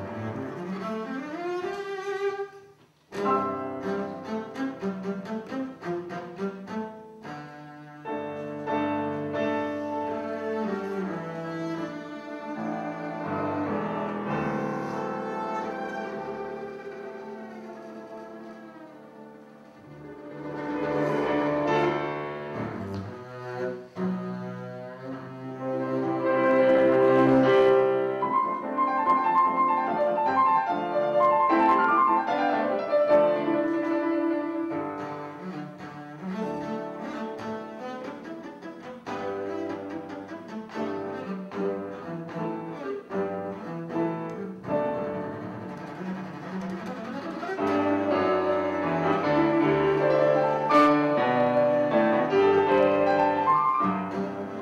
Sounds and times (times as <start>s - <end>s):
Classical music: 0.0s - 54.6s.